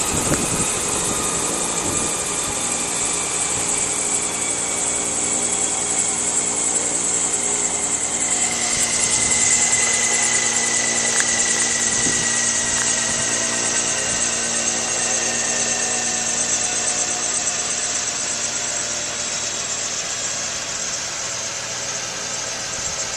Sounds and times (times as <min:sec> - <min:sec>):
Helicopter: 0:00.0 - 0:23.1.